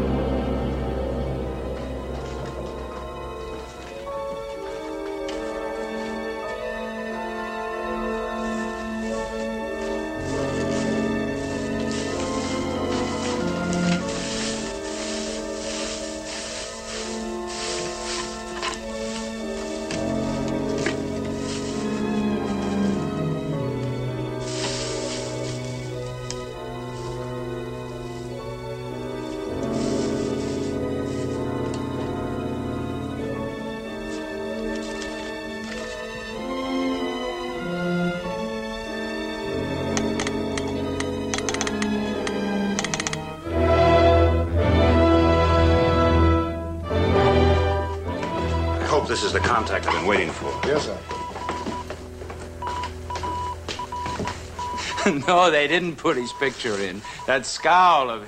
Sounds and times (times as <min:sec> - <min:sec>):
Music: 0:00.0 - 0:58.2.